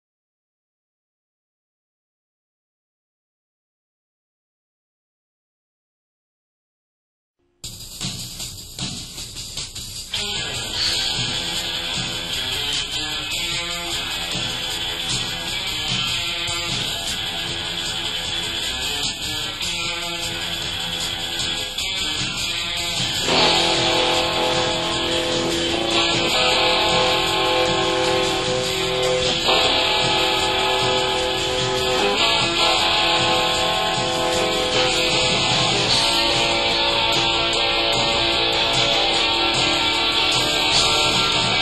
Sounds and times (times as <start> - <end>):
Music: 7.4 - 41.6.